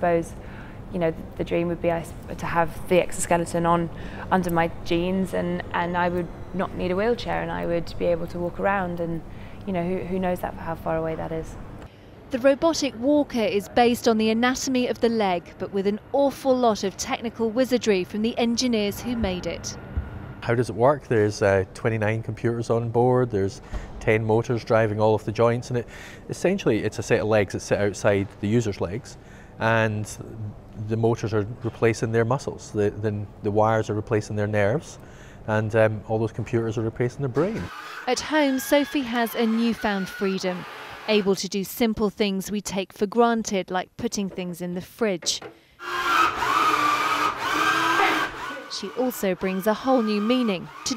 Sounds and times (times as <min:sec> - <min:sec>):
Blender: 0:37.4 - 0:41.4, 0:45.8 - 0:50.9.